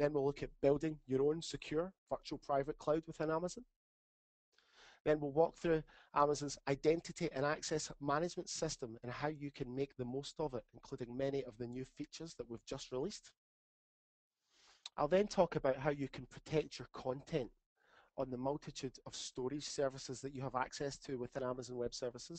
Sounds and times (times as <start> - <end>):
Speech: 0.0 - 3.7, 5.0 - 13.4, 14.9 - 17.6, 18.2 - 22.3.